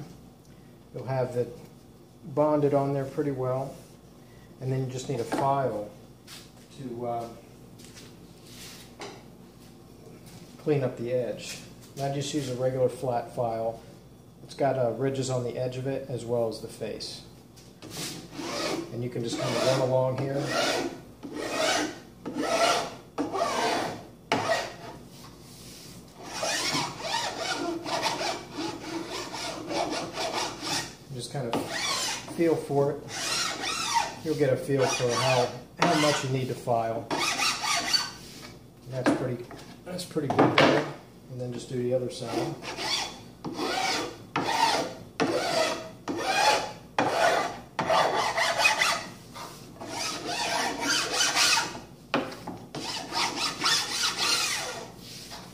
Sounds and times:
Filing (rasp): 17.8s - 25.0s, 26.2s - 32.4s, 33.1s - 36.3s, 37.1s - 38.2s, 42.2s - 51.8s, 52.7s - 55.5s.

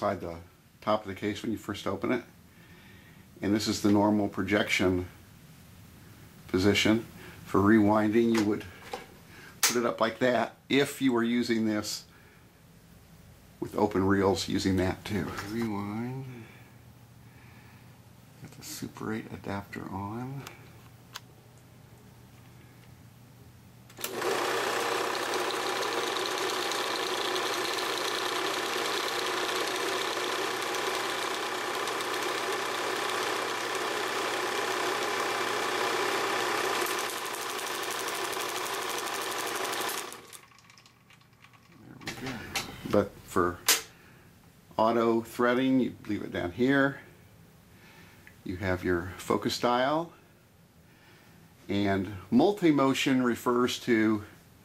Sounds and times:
Inside, small room: 0.0s - 54.6s.

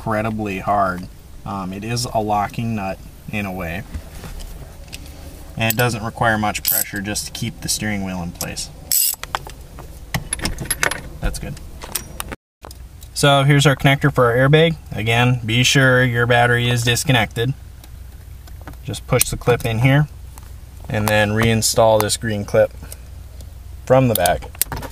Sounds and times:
Speech: 0.0s - 3.9s, 5.6s - 8.7s, 11.2s - 11.6s, 13.2s - 17.6s, 18.9s - 20.1s, 20.9s - 22.8s, 23.8s - 24.5s.

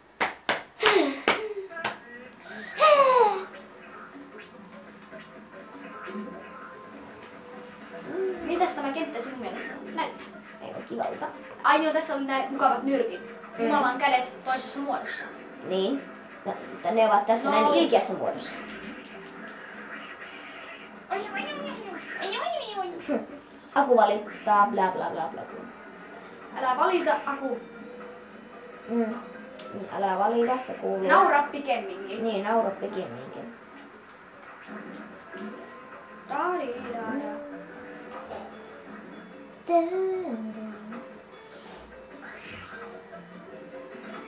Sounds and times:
Music: 0.0s - 44.2s.

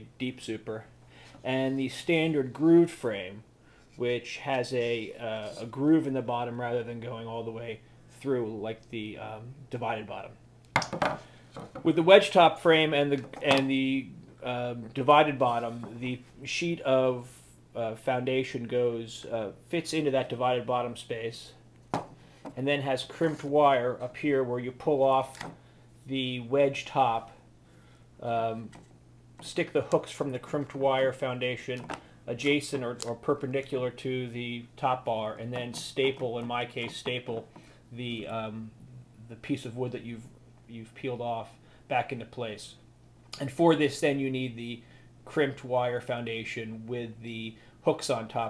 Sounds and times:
Speech: 0.0s - 10.4s, 11.8s - 21.6s, 22.6s - 25.4s, 26.1s - 27.4s, 28.2s - 28.8s, 29.4s - 42.8s, 43.4s - 48.5s.

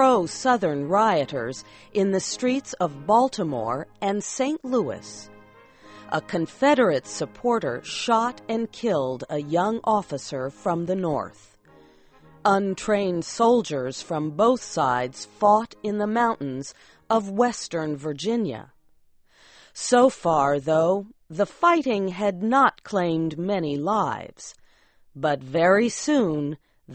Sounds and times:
Speech: 0.0s - 5.2s, 6.1s - 11.4s, 12.5s - 18.7s, 19.8s - 24.6s, 25.2s - 26.9s
Music: 0.0s - 19.0s.

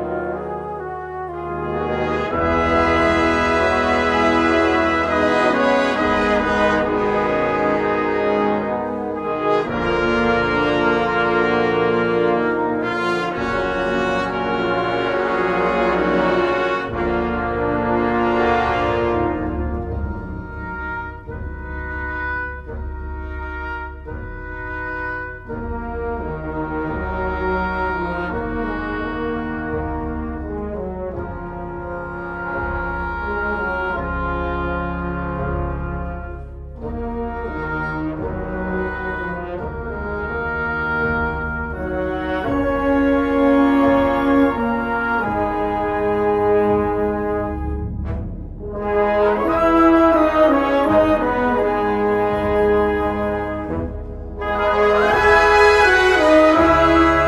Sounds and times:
Exciting music: 0.0s - 57.2s.

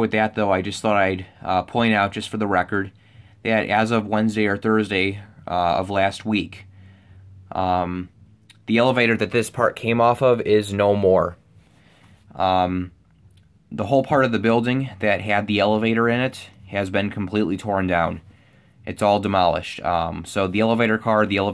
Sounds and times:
Speech: 0.0s - 6.6s, 7.5s - 11.4s, 12.4s - 13.0s, 13.7s - 18.2s, 18.9s - 21.5s.

